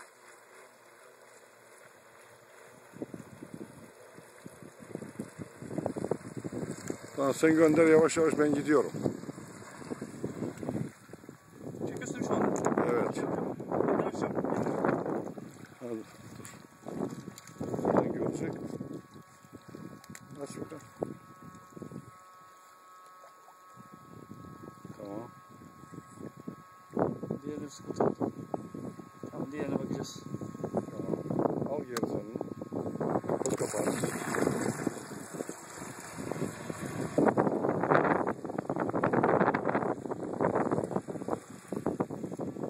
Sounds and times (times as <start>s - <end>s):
Waves, surf: 0.0s - 11.3s, 14.0s - 19.8s, 38.9s - 42.7s
Wind noise (microphone): 3.0s - 22.2s, 23.8s - 42.7s.